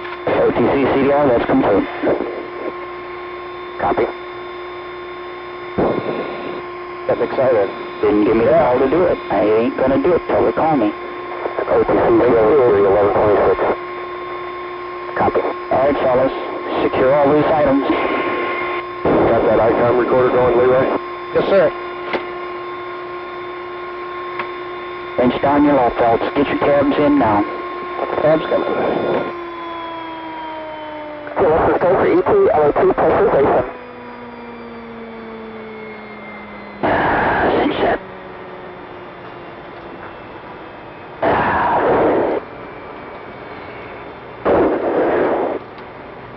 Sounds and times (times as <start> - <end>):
Speech: 0.3 - 2.4, 3.8 - 4.1, 7.1 - 11.0, 11.6 - 13.7, 15.1 - 18.0, 19.1 - 21.8, 25.2 - 29.3, 31.3 - 33.7, 37.5 - 38.0.